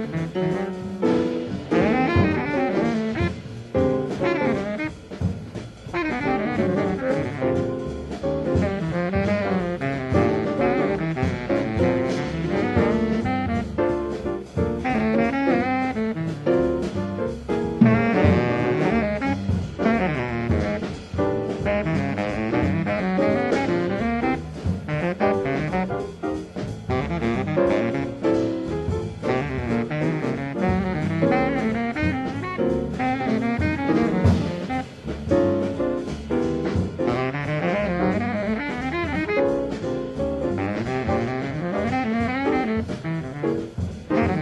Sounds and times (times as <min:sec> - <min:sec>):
Music: 0:00.0 - 0:44.4.